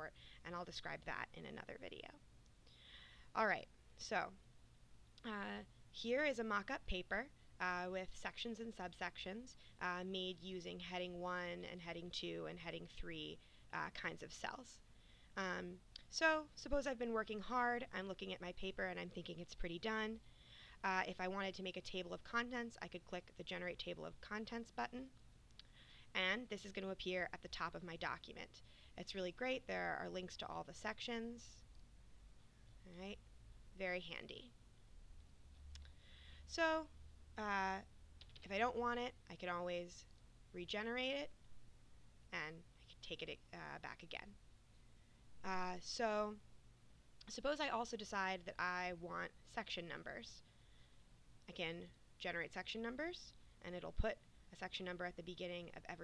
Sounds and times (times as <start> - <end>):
Speech: 0.0 - 2.2, 3.4 - 4.4, 5.2 - 14.8, 15.4 - 20.2, 20.8 - 25.1, 26.2 - 31.6, 32.9 - 33.2, 33.8 - 34.5, 36.5 - 41.3, 42.4 - 44.4, 45.5 - 46.4, 47.2 - 50.4, 51.5 - 56.0.